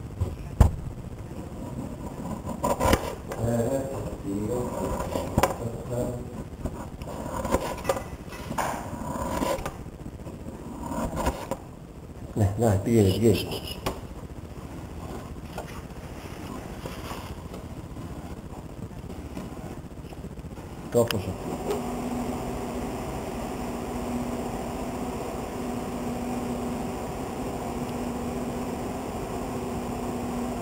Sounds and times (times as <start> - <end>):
Speech: 3.4 - 6.4, 12.4 - 13.8, 20.9 - 21.4.